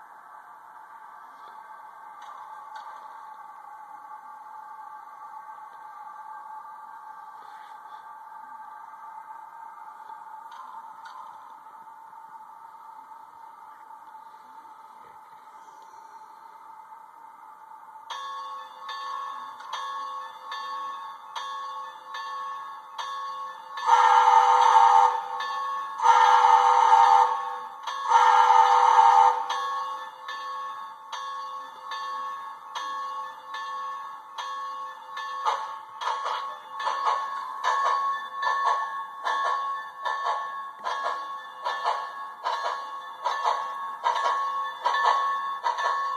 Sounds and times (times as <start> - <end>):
Train: 0.0 - 46.1.